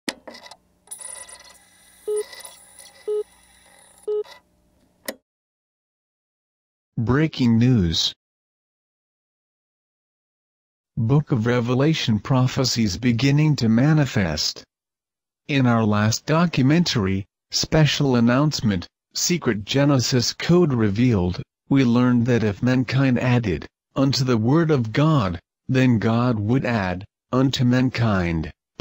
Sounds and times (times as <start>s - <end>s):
Speech: 7.0s - 8.2s, 11.0s - 14.7s, 15.5s - 28.8s.